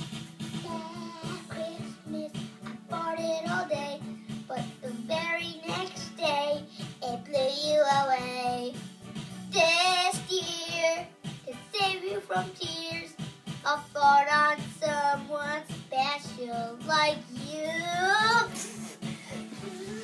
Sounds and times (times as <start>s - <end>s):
Music: 0.0s - 20.0s
Child singing: 0.6s - 8.8s, 9.5s - 18.6s.